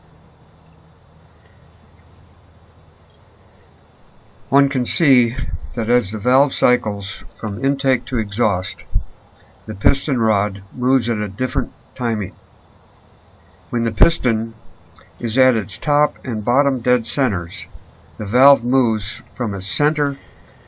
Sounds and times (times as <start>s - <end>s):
Speech: 4.5s - 8.9s, 9.7s - 12.4s, 13.7s - 14.6s, 15.2s - 20.2s.